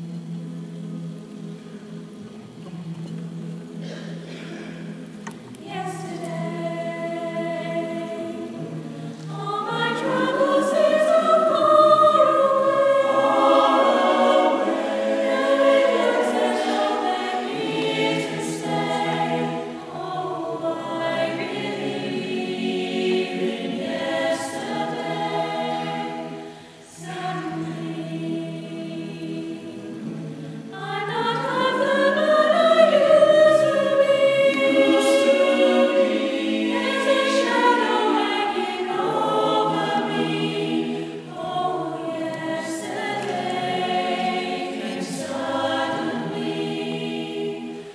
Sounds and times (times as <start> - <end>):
Choir: 0.0 - 47.9.